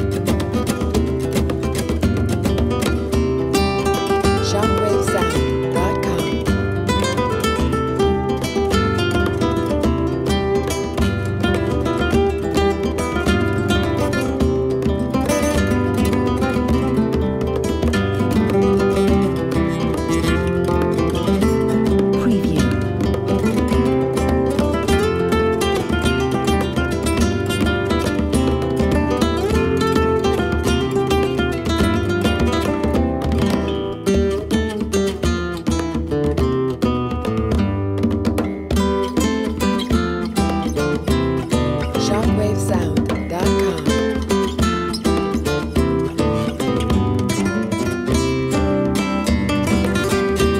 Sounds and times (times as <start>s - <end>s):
Plucked string instrument: 0.0s - 50.5s
Speech: 4.4s - 6.4s, 22.1s - 22.8s, 41.9s - 44.2s.